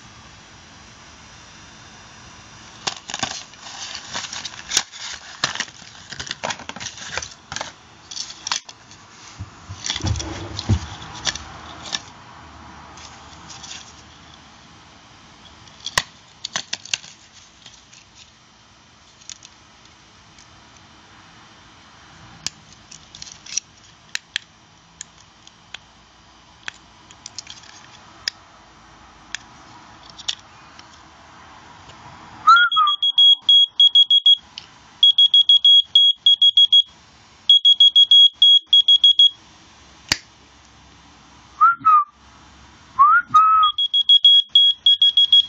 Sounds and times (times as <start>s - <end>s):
Buzzer: 32.6s - 34.4s, 35.0s - 36.9s, 37.5s - 39.4s, 43.6s - 45.4s.